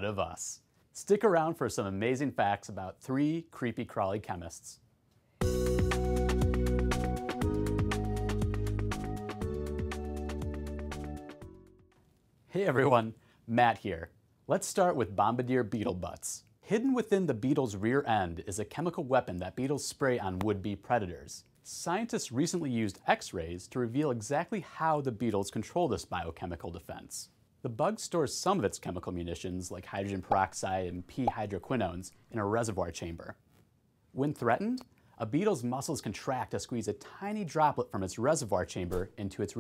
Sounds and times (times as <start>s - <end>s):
Speech: 0.0s - 4.8s, 12.5s - 33.4s, 34.2s - 39.6s.